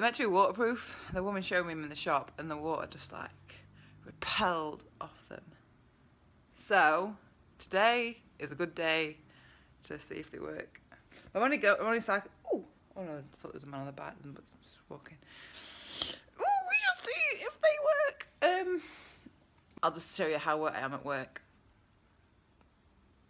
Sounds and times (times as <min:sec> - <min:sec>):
Speech: 0:00.0 - 0:05.6, 0:09.8 - 0:15.2, 0:16.4 - 0:18.8, 0:19.8 - 0:21.5.